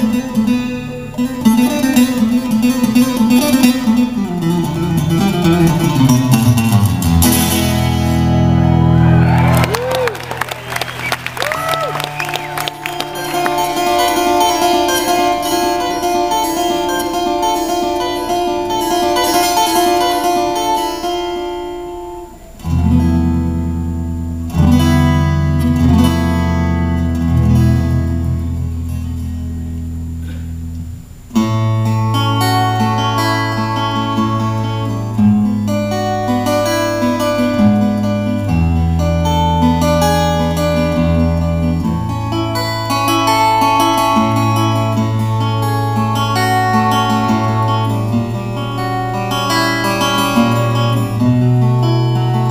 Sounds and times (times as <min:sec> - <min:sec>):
Acoustic guitar: 0:00.0 - 0:52.5
Flamenco: 0:11.0 - 0:52.5.